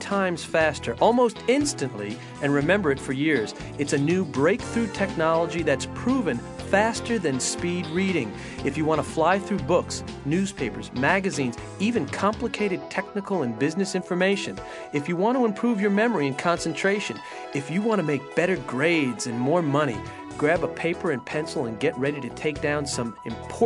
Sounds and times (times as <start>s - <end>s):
Music: 0.0s - 23.6s
Speech: 0.0s - 23.6s.